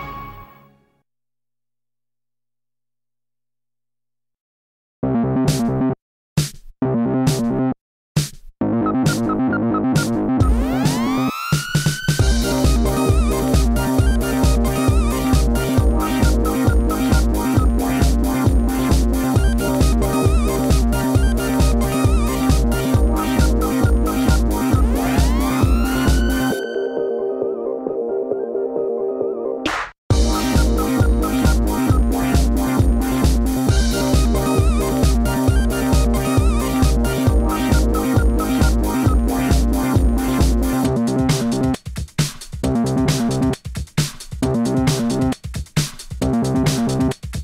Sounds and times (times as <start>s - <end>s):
Music: 0.0s - 1.0s, 5.0s - 47.4s.